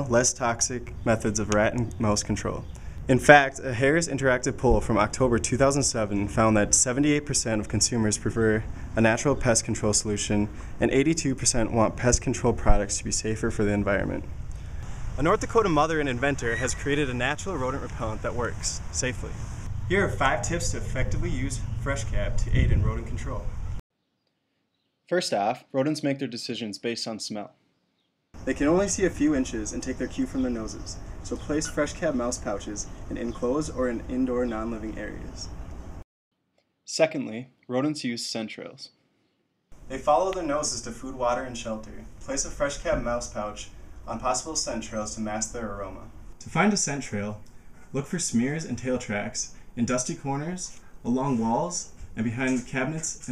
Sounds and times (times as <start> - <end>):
Speech: 0.0 - 14.3, 15.2 - 23.5, 25.1 - 27.5, 28.4 - 35.5, 36.9 - 39.0, 39.9 - 53.3.